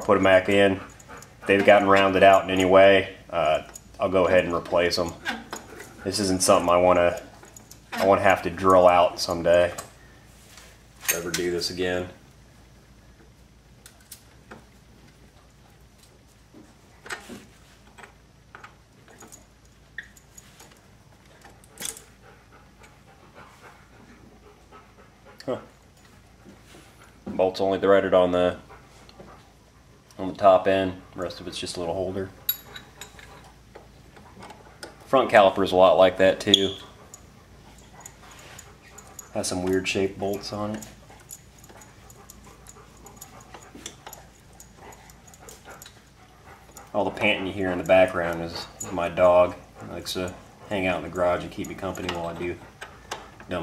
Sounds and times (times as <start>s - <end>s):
Speech: 0.0s - 0.8s, 1.5s - 5.2s, 6.0s - 7.3s, 8.0s - 9.8s, 11.1s - 12.2s, 27.3s - 28.6s, 30.2s - 32.4s, 35.1s - 36.8s, 39.4s - 40.9s, 46.9s - 52.6s.